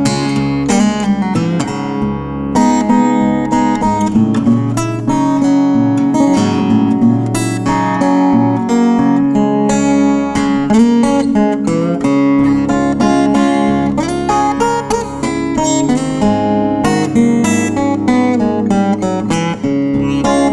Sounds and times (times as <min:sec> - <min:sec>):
Strum: 0:00.0 - 0:20.5.